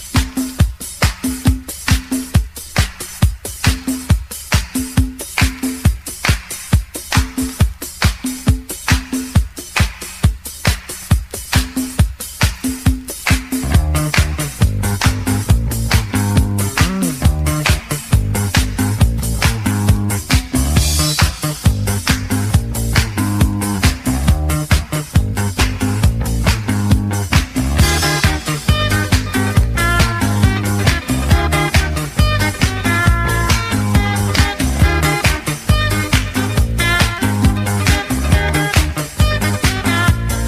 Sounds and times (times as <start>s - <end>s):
Music: 0.0s - 40.4s.